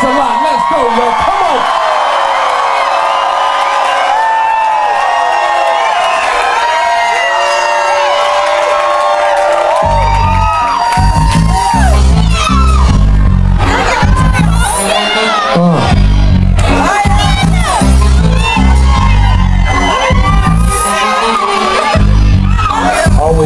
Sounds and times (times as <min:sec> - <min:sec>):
Music: 0:07.8 - 0:23.4.